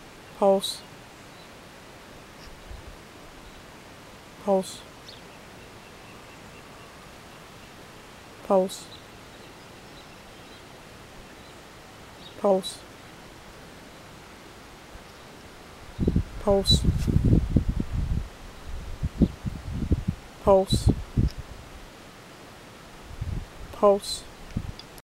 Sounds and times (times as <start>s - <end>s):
Speech: 0.4s - 0.9s, 4.4s - 4.9s, 8.4s - 8.9s, 12.4s - 12.9s, 16.4s - 17.0s, 20.4s - 21.0s, 23.7s - 24.3s.